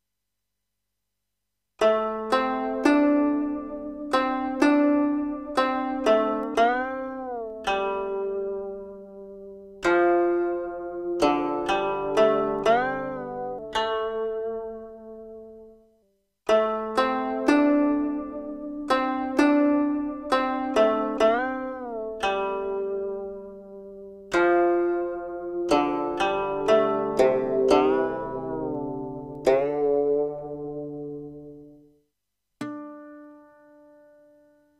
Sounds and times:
Zither: 1.8s - 15.8s, 16.5s - 31.9s.

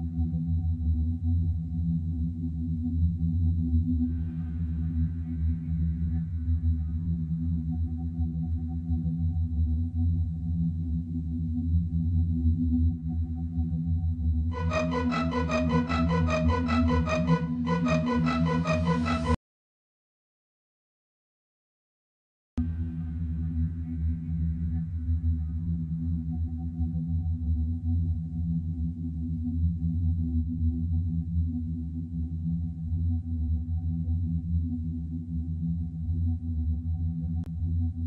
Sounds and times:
Music: 0.0s - 19.4s, 22.6s - 38.0s.

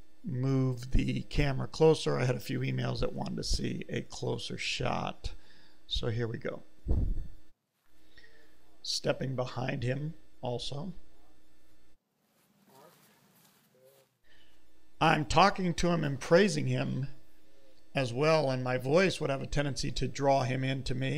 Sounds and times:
Speech: 0.3s - 6.7s, 8.6s - 11.4s, 15.0s - 17.2s, 17.9s - 21.1s.

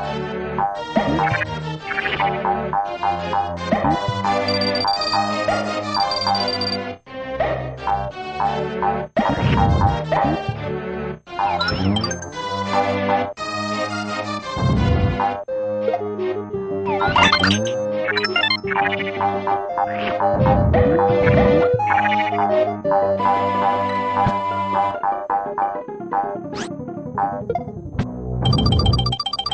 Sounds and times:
Music: 0.0s - 29.5s.

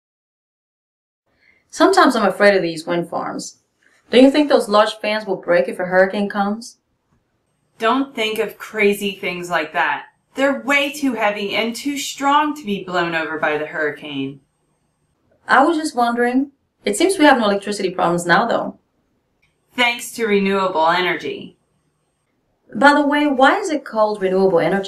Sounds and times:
Speech: 1.7s - 6.8s, 7.8s - 14.4s, 15.5s - 18.8s, 19.8s - 21.5s, 22.7s - 24.8s.

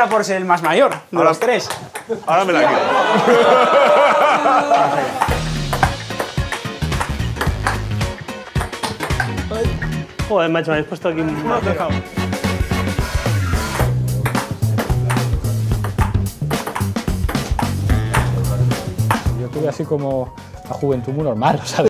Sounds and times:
Music: 4.4s - 21.9s
Speech: 10.3s - 12.0s, 19.4s - 21.9s.

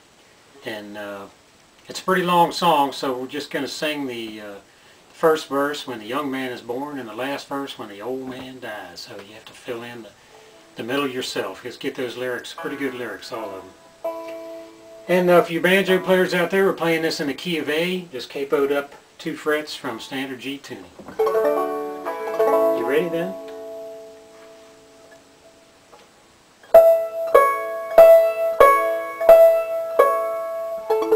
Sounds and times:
Speech: 0.6s - 10.2s, 10.8s - 13.7s, 15.1s - 21.0s, 22.7s - 23.4s
Music: 12.6s - 16.5s, 21.2s - 25.8s, 26.6s - 31.1s.

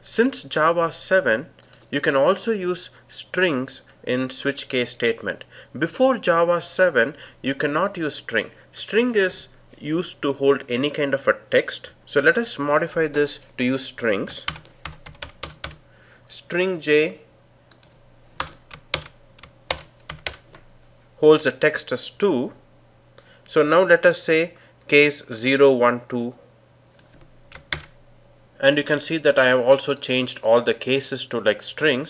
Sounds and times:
Typing: 14.4s - 15.8s, 17.7s - 20.4s, 27.5s - 27.9s.

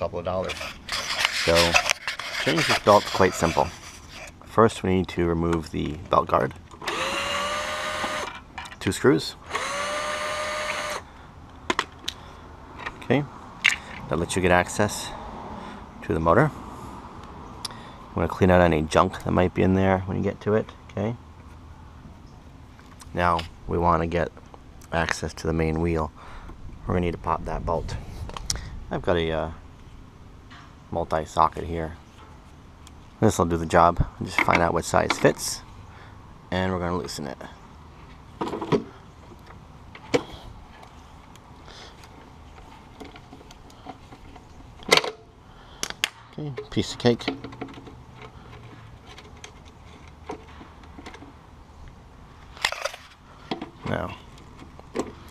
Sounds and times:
Power tool: 6.8s - 8.3s, 9.4s - 11.0s.

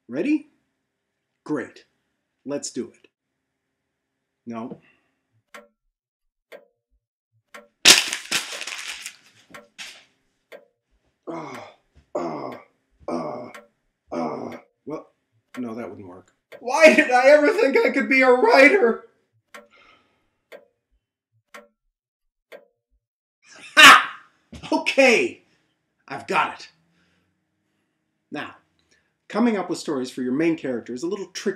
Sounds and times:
Speech: 0.0s - 0.5s, 1.5s - 1.9s, 2.5s - 3.0s, 4.5s - 4.8s, 15.6s - 19.0s, 24.6s - 25.4s, 26.1s - 26.7s, 28.3s - 28.6s, 29.3s - 31.5s
Inside, small room: 0.0s - 5.7s, 7.5s - 21.7s, 23.4s - 31.5s
Crack: 7.8s - 10.1s.

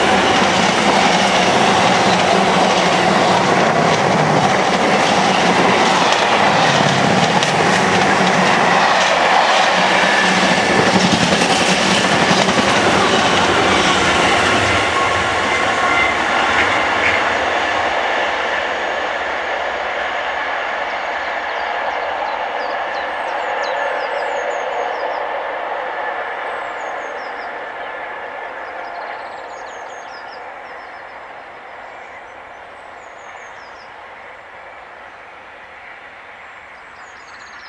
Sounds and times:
Railroad car, train wagon: 0.0s - 37.6s
Train: 0.0s - 37.6s.

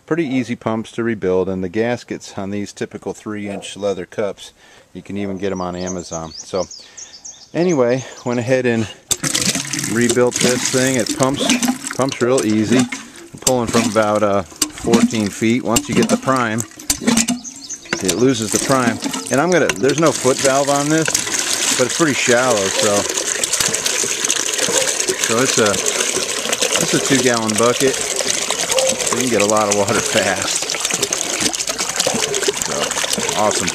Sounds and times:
Speech: 0.1s - 6.7s, 7.6s - 9.0s, 9.9s - 16.7s, 18.0s - 21.1s, 21.8s - 23.1s, 25.3s - 25.8s, 26.8s - 28.0s, 29.1s - 30.6s, 32.7s - 33.7s
Pump (liquid): 9.1s - 33.7s.

